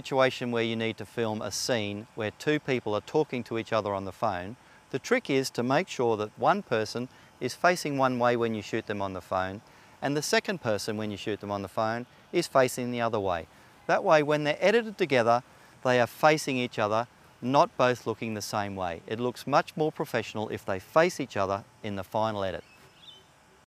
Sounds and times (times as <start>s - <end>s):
Speech: 0.0s - 22.7s.